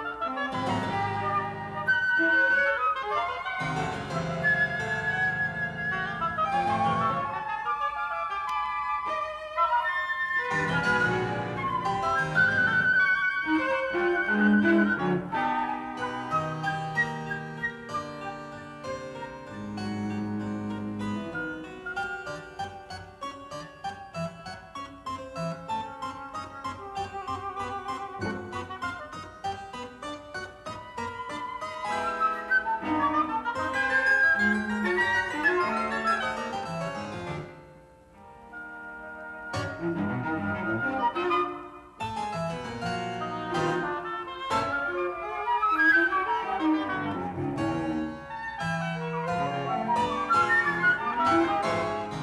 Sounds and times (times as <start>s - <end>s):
Piano: 0.0s - 52.2s
Harpsichord: 14.5s - 38.0s.